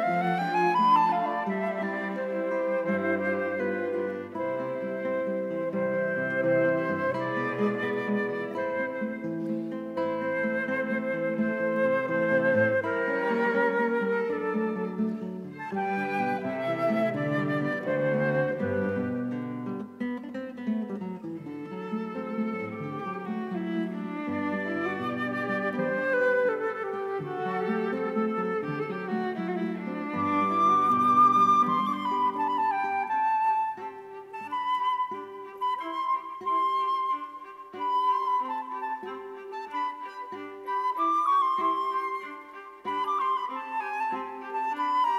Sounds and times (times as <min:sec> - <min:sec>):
Cello: 0:00.0 - 0:45.1.